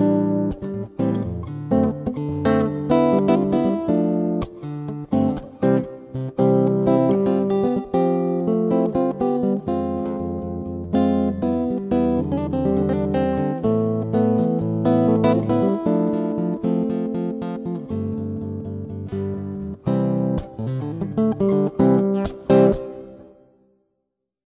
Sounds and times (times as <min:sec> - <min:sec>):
Electric guitar: 0:00.0 - 0:23.6.